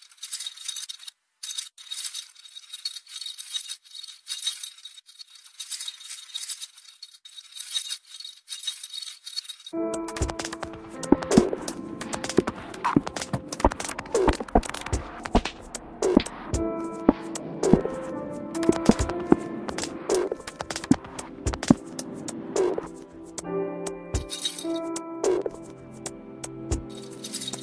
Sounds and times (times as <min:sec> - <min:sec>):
Background music: 0:09.8 - 0:27.6.